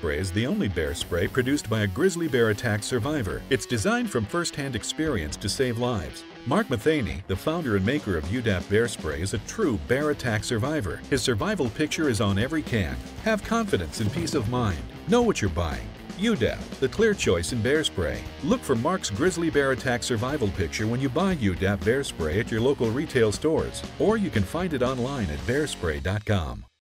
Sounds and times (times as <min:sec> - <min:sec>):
Music: 0:00.0 - 0:26.8
Speech: 0:00.0 - 0:26.8.